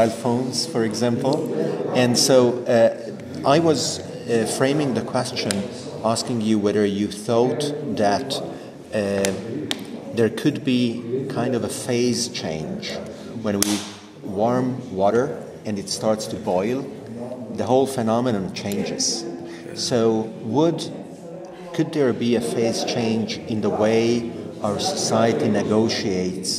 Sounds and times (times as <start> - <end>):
Speech: 0.0 - 26.5.